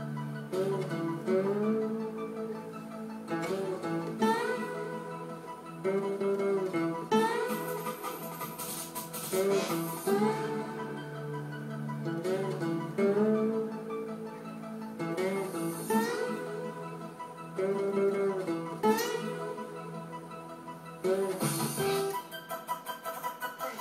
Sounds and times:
Strum: 0:00.0 - 0:22.3.

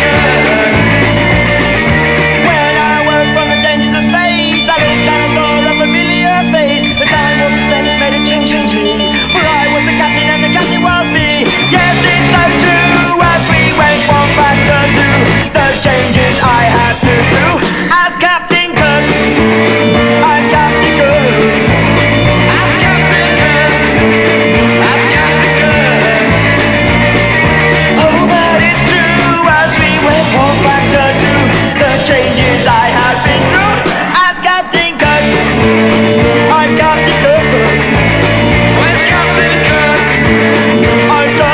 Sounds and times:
Music: 0:00.0 - 0:41.5.

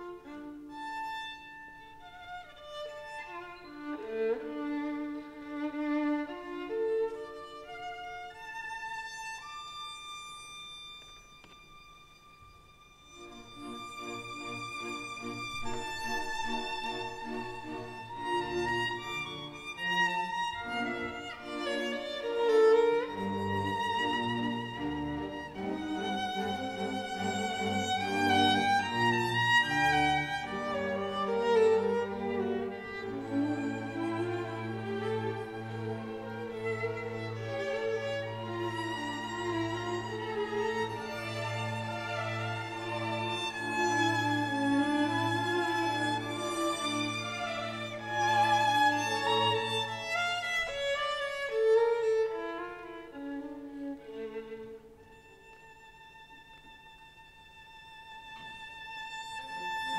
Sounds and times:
Violin, fiddle: 0:00.0 - 0:59.9.

